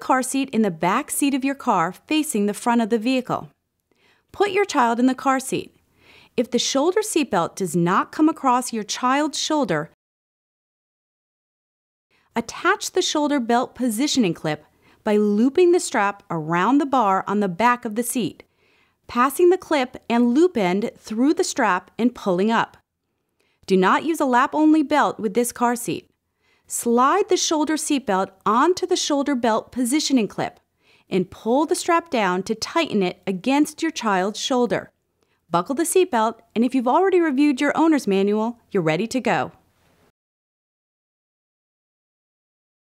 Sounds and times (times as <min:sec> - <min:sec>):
Speech: 0:00.0 - 0:03.6, 0:04.4 - 0:05.8, 0:06.4 - 0:10.0, 0:12.4 - 0:18.4, 0:19.1 - 0:22.8, 0:23.7 - 0:26.1, 0:26.7 - 0:34.9, 0:35.5 - 0:39.6.